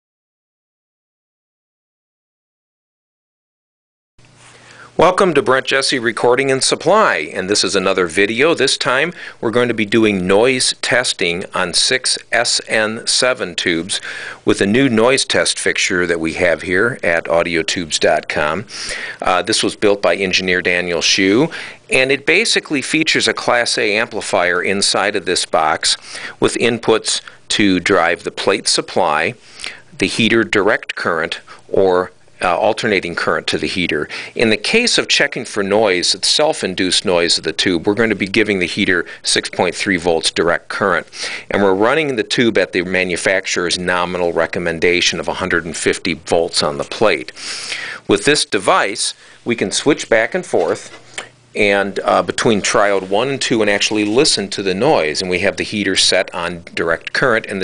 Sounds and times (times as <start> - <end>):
Speech: 5.0 - 29.4, 30.0 - 47.4, 48.1 - 57.6.